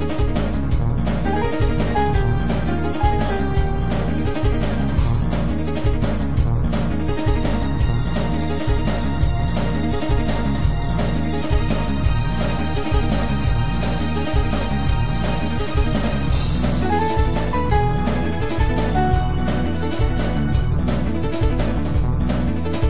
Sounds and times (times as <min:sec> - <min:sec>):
Soundtrack music: 0:00.0 - 0:22.8
Video game music: 0:00.0 - 0:22.8.